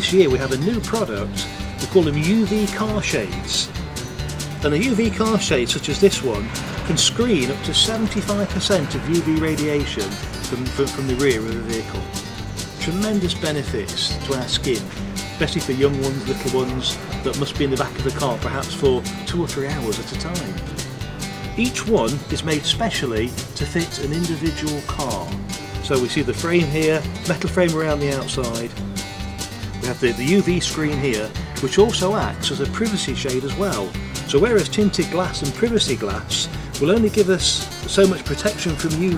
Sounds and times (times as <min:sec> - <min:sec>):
Speech: 0:00.0 - 0:03.7, 0:04.6 - 0:12.2, 0:12.8 - 0:20.7, 0:21.6 - 0:28.8, 0:29.8 - 0:39.1
Music: 0:00.0 - 0:39.1.